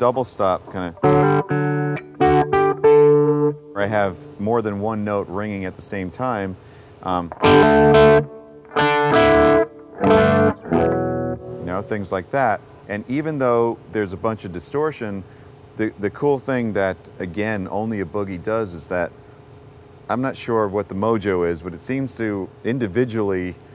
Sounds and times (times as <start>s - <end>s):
Speech: 0.0s - 1.0s, 3.8s - 7.4s, 11.6s - 19.1s, 20.1s - 23.6s
Guitar: 0.0s - 5.6s, 7.0s - 12.9s.